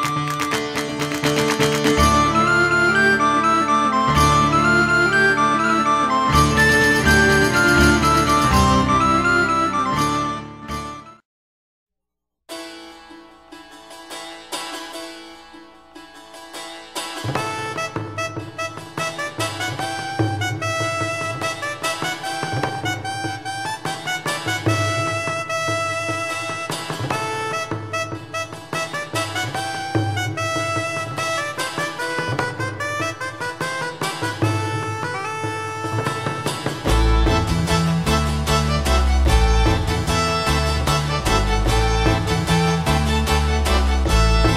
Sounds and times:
Music: 0.0 - 11.3, 12.5 - 44.5.

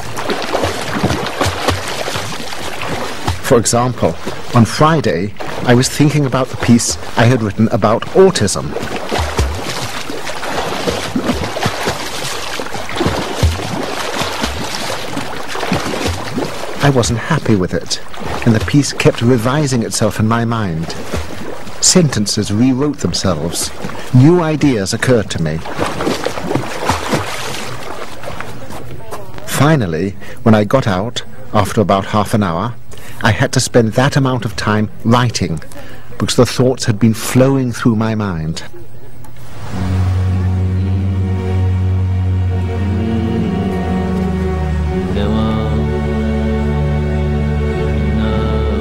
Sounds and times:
Speech: 3.4 - 8.8, 16.8 - 21.0, 21.8 - 25.7, 28.5 - 39.1, 45.1 - 45.9, 48.2 - 48.8.

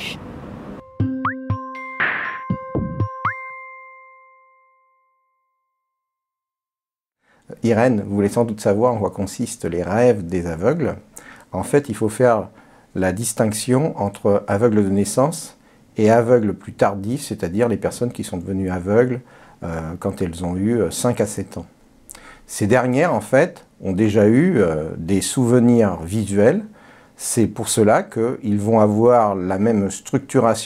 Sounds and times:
Speech: 0.0 - 0.2, 7.5 - 21.8, 22.5 - 30.6.

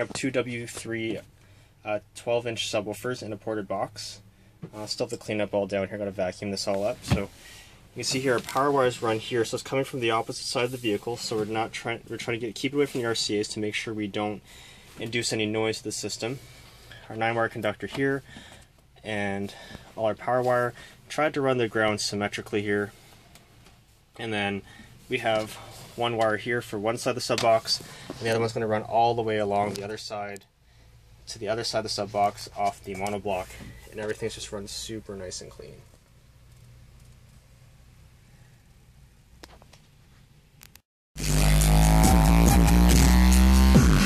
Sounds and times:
Speech: 0.0 - 7.3, 8.0 - 14.4, 15.0 - 16.4, 17.1 - 18.3, 19.0 - 23.0, 24.2 - 30.5, 31.3 - 35.9.

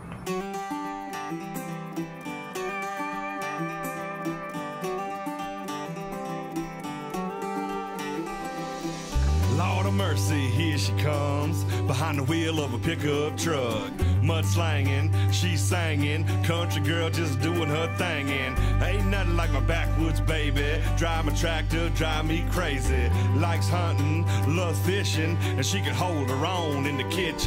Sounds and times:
Music: 0.0 - 27.4.

